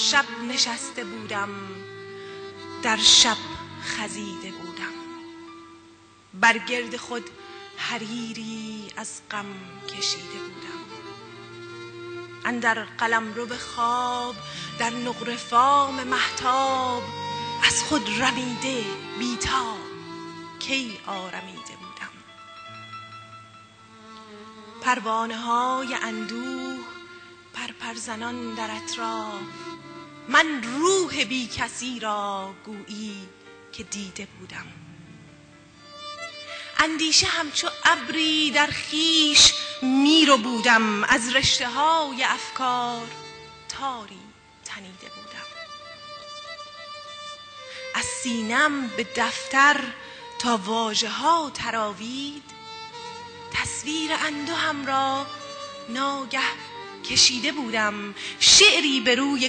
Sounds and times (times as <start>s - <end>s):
Speech: 0.0s - 1.8s, 2.9s - 5.0s, 6.4s - 10.8s, 12.5s - 17.0s, 17.6s - 19.9s, 20.6s - 22.2s, 24.9s - 26.8s, 27.6s - 29.4s, 30.3s - 34.8s, 36.8s - 45.5s, 48.0s - 52.4s, 53.6s - 55.3s, 55.9s - 59.4s
Violin, fiddle: 0.0s - 31.6s, 35.8s - 59.4s.